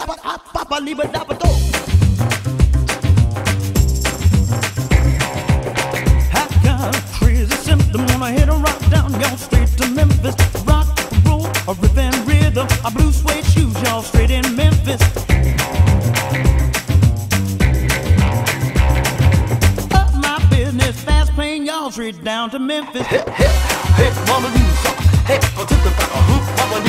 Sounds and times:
Music: 1.1s - 21.4s, 23.3s - 26.8s.

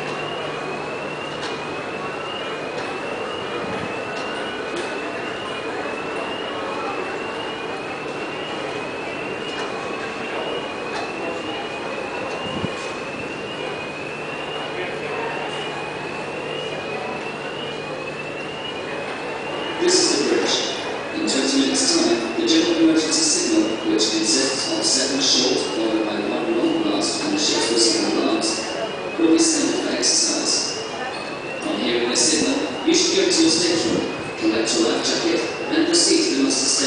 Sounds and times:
Speech: 14.6s - 15.8s, 19.7s - 36.8s.

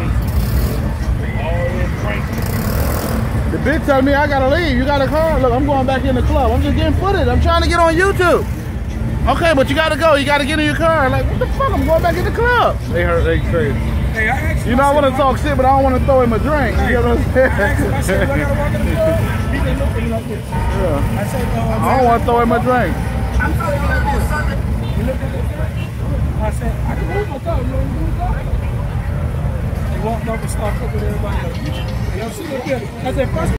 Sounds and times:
Car: 0.0s - 33.5s.

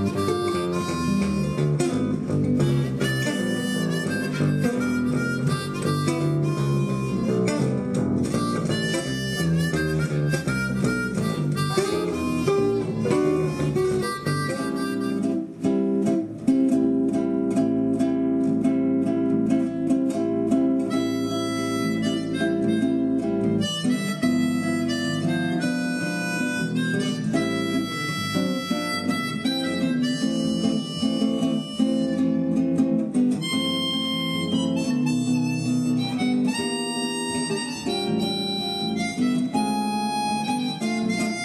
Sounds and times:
Harmonica: 0.0s - 16.0s, 20.7s - 41.4s
Wind instrument, woodwind instrument: 0.0s - 16.0s, 20.8s - 32.7s, 33.3s - 41.4s.

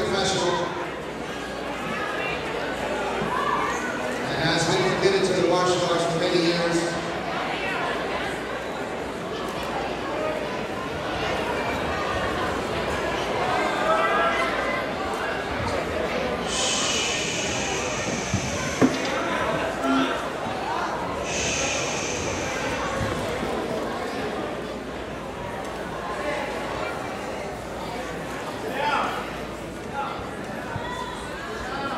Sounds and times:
Speech: 0.0s - 31.9s.

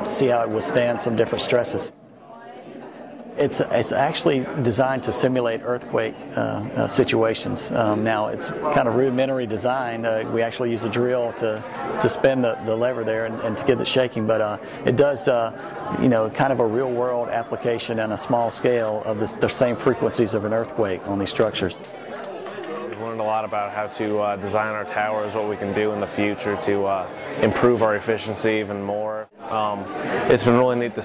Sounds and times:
Speech: 0.0s - 2.5s, 3.4s - 21.8s, 22.9s - 31.0s.

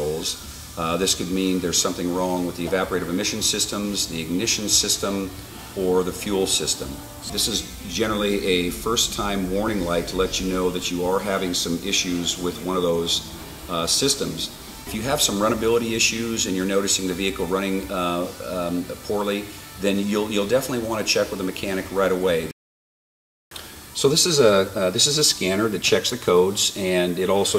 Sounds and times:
Music: 0.0s - 22.6s, 23.5s - 27.5s
Speech: 0.0s - 22.6s, 24.0s - 27.5s.

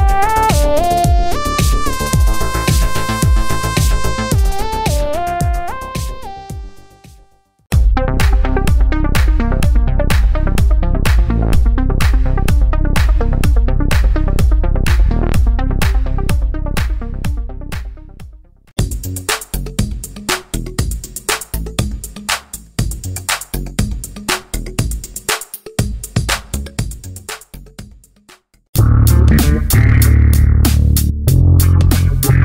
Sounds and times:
Music: 0.0s - 32.4s.

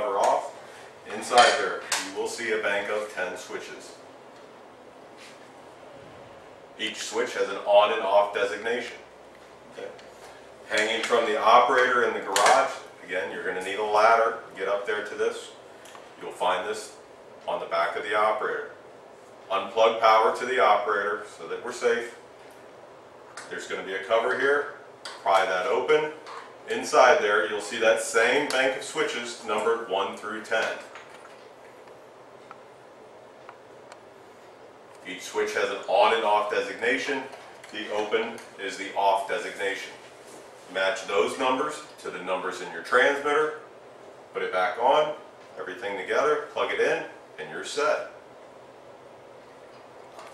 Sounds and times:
Speech: 0.0s - 4.0s, 6.8s - 9.1s, 9.7s - 10.0s, 10.7s - 15.6s, 16.2s - 18.8s, 19.5s - 22.2s, 23.4s - 30.9s, 35.0s - 40.0s, 40.7s - 43.7s, 44.3s - 48.2s.

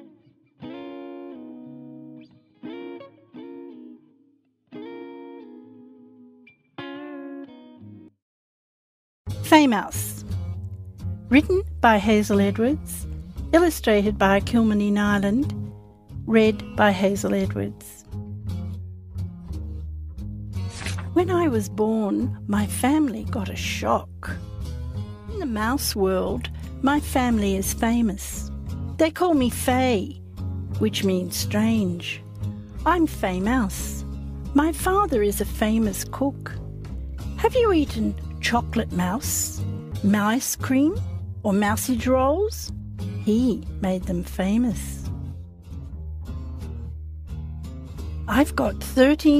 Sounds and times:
Music: 0.0s - 8.2s, 9.3s - 49.3s
Speech: 9.4s - 10.3s, 11.3s - 15.5s, 16.3s - 18.0s, 21.2s - 24.4s, 25.3s - 30.2s, 30.8s - 32.2s, 32.8s - 36.6s, 37.4s - 45.1s, 48.3s - 49.3s.

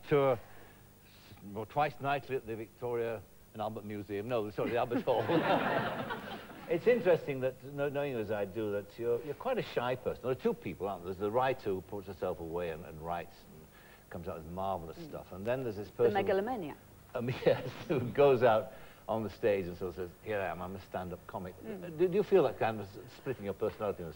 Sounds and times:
Speech: 1.3s - 5.3s, 6.7s - 24.1s.

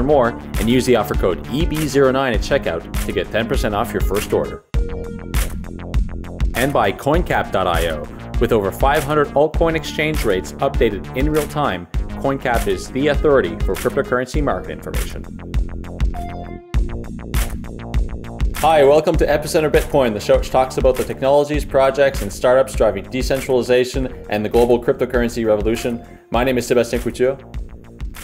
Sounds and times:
Speech: 0.0s - 4.6s, 6.6s - 15.3s, 18.6s - 27.4s
Music: 0.0s - 28.2s.

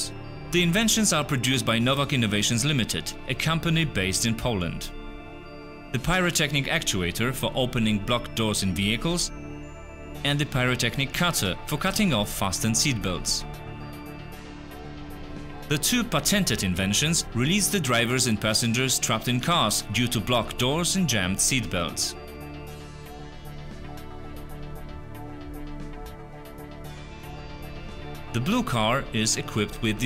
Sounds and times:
Speech: 0.0s - 5.0s, 6.0s - 9.3s, 10.2s - 13.5s, 15.7s - 22.2s, 28.4s - 30.0s
Music: 0.0s - 30.0s.

